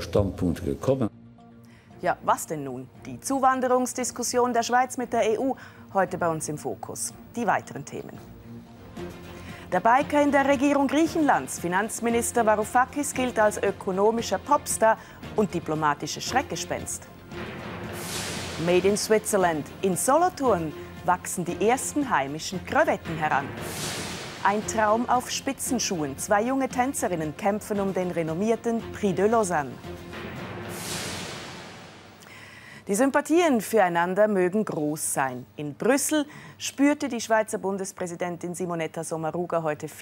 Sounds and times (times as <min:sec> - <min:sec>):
Music: 0:00.0 - 0:40.0.